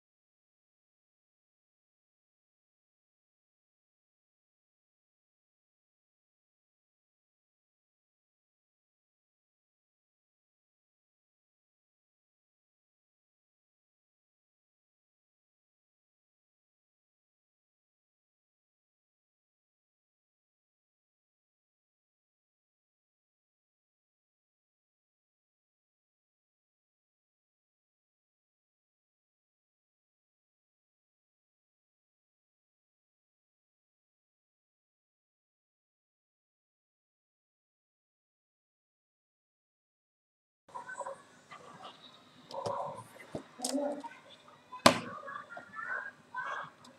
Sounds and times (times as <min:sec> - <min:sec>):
Speech: 0:40.7 - 0:46.9.